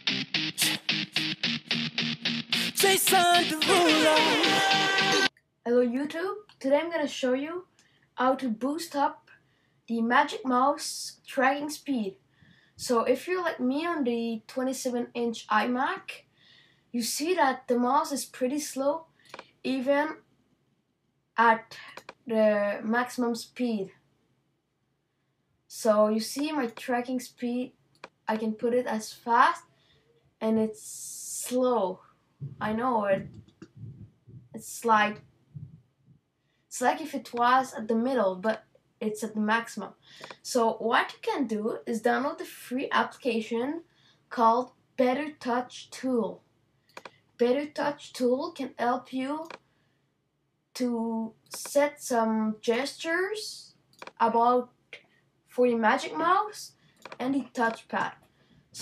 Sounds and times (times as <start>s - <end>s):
Speech: 5.7s - 9.2s, 9.9s - 12.2s, 12.8s - 16.2s, 17.0s - 19.0s, 19.7s - 20.2s, 21.4s - 24.0s, 25.7s - 27.7s, 28.3s - 29.7s, 30.4s - 35.2s, 36.7s - 46.4s, 47.4s - 49.6s, 50.8s - 54.7s, 55.5s - 58.2s.